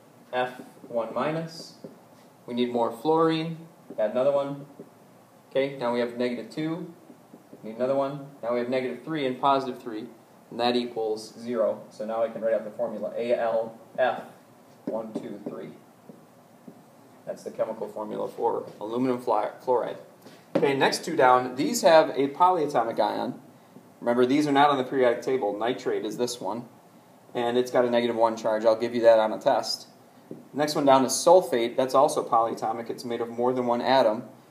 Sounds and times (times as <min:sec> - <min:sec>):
Speech: 0:00.3 - 0:01.9, 0:02.5 - 0:04.7, 0:05.5 - 0:07.0, 0:07.6 - 0:15.8, 0:17.3 - 0:23.4, 0:24.0 - 0:26.7, 0:27.4 - 0:30.0, 0:30.6 - 0:34.3.